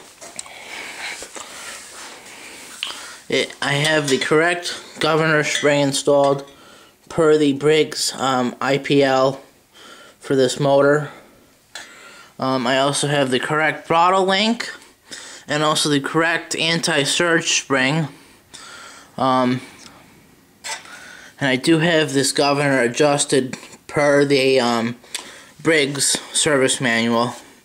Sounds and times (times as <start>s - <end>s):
Speech: 3.3s - 6.5s, 7.1s - 9.5s, 10.2s - 11.2s, 12.4s - 14.8s, 15.5s - 18.2s, 19.2s - 19.7s, 21.4s - 25.0s, 25.6s - 27.5s.